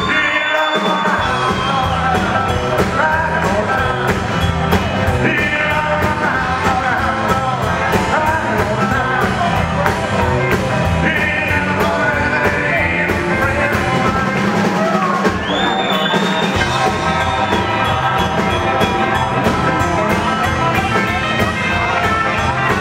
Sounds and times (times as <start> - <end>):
Music: 0.0 - 22.8.